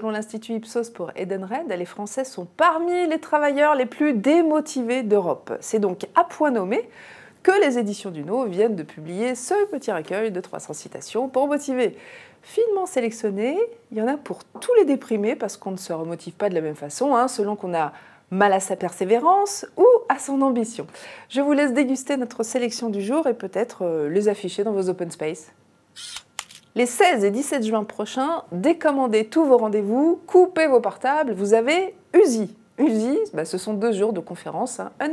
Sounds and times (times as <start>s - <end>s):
Speech: 0.0s - 25.6s, 26.8s - 35.1s.